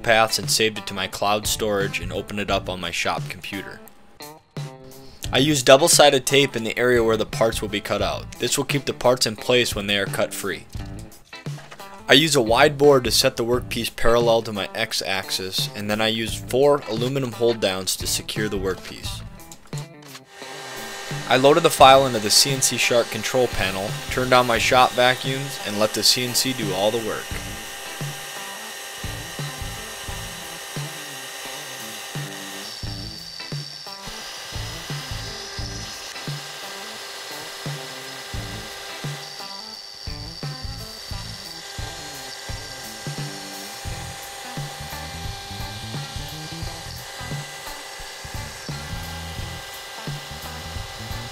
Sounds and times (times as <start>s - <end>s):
Speech: 0.0s - 3.8s, 5.3s - 10.7s, 12.1s - 19.2s, 21.3s - 27.6s
Music: 0.0s - 51.3s.